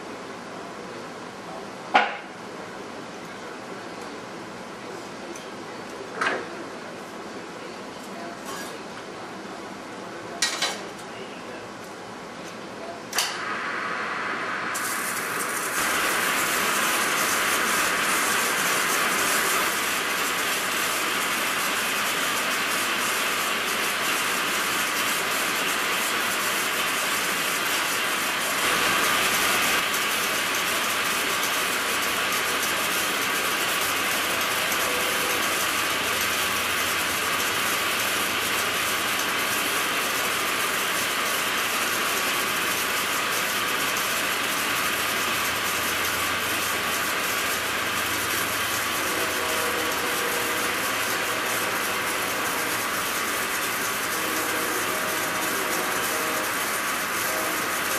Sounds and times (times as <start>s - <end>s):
Power tool: 13.3s - 57.9s.